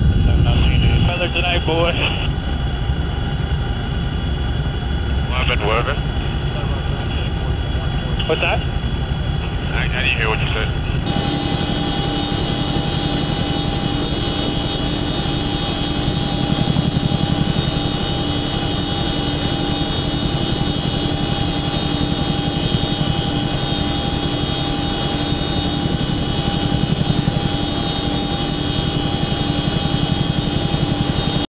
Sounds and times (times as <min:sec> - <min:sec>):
Helicopter: 0:00.0 - 0:31.5.